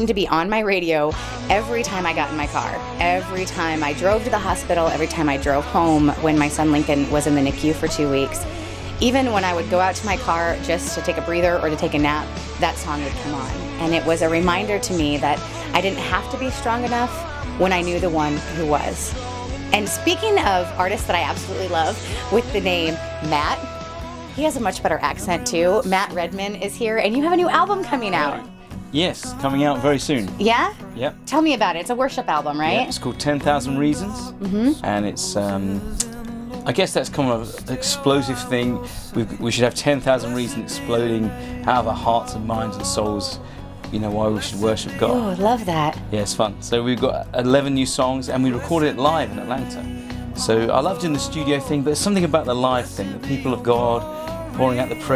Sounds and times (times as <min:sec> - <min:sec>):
Music: 0:00.0 - 0:55.1
Speech: 0:24.4 - 0:35.8, 0:36.7 - 0:43.4, 0:44.0 - 0:49.8, 0:50.4 - 0:55.1.